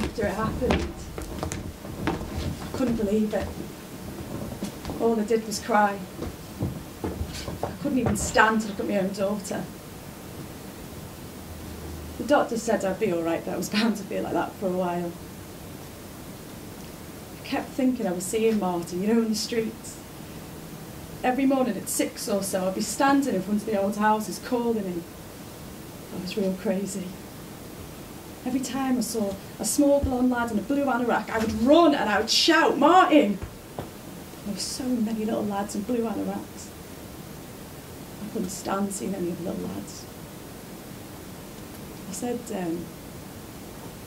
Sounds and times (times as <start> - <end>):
Speech: 0.0 - 1.1, 2.7 - 3.6, 5.0 - 6.1, 7.8 - 9.7, 12.2 - 15.2, 17.4 - 20.0, 21.2 - 25.1, 26.2 - 27.2, 28.4 - 33.5, 34.5 - 36.7, 38.2 - 40.1, 42.1 - 42.9.